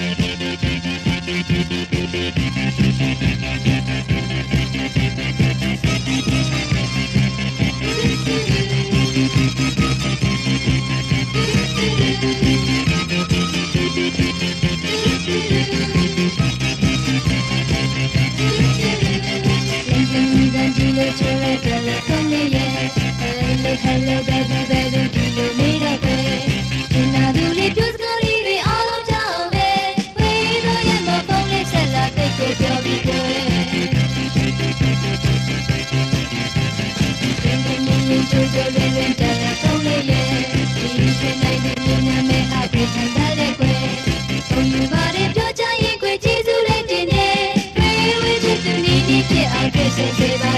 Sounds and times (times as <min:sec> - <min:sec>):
Music: 0:00.0 - 0:50.5.